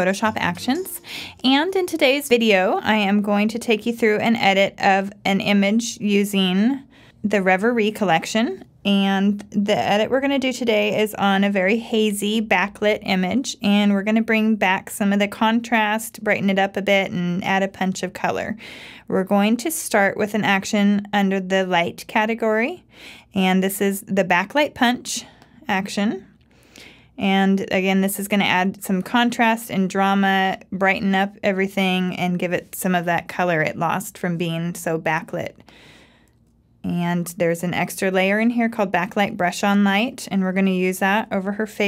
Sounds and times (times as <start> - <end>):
Speech: 0.0 - 26.3, 27.2 - 35.6, 36.8 - 41.8.